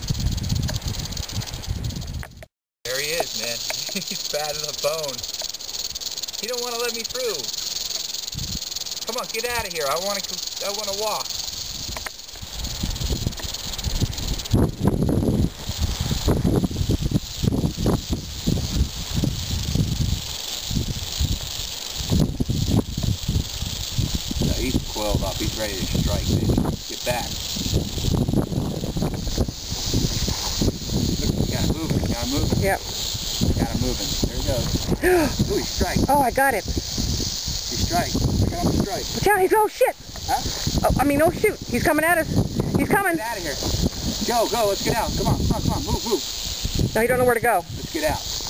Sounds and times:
Snake: 0:00.0 - 0:48.5.

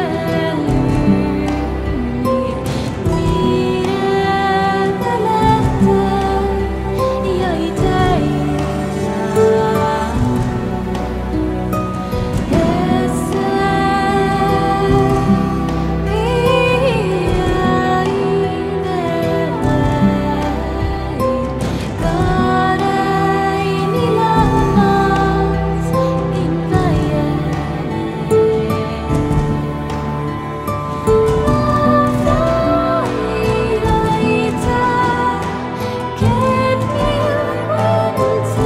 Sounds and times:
Soundtrack music: 0:00.0 - 0:38.6.

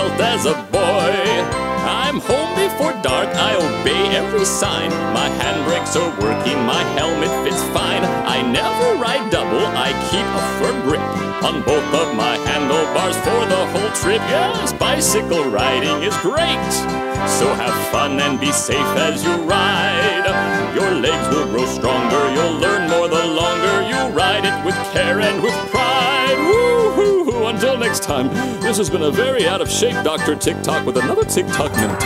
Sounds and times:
Music: 0:00.0 - 0:32.0.

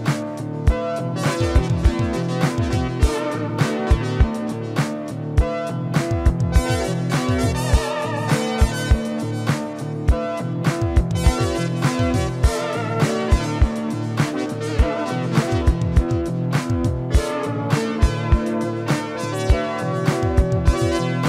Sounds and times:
Piano: 0:00.0 - 0:21.2
Synthesizer: 0:00.0 - 0:21.2.

